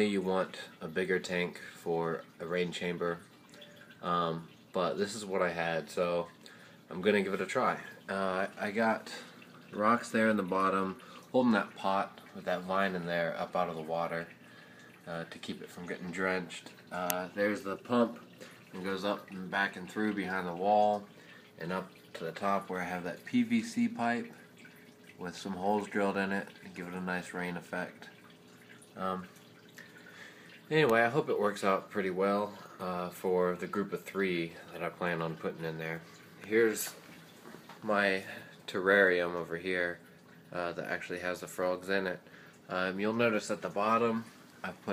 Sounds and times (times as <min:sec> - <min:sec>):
Speech: 0:00.0 - 0:03.2, 0:04.0 - 0:06.3, 0:06.9 - 0:14.4, 0:15.1 - 0:24.4, 0:25.2 - 0:28.1, 0:29.0 - 0:29.3, 0:30.7 - 0:37.0, 0:37.8 - 0:44.9.